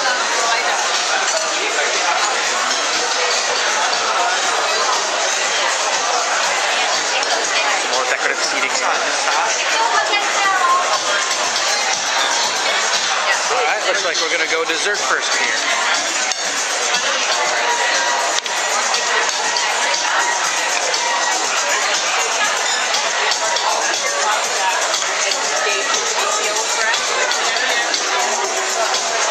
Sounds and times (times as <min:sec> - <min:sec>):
Music: 0:00.0 - 0:29.3
Speech: 0:00.0 - 0:29.3.